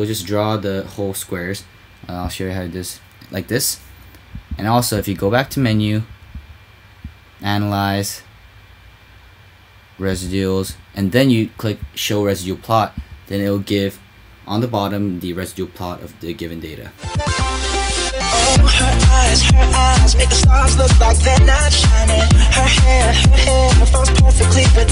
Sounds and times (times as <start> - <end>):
Dance music: 17.0 - 24.9.